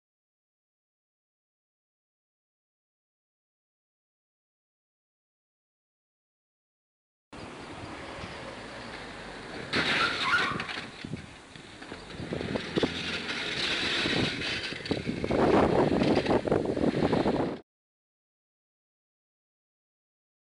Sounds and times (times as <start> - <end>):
Vehicle: 7.4 - 17.6.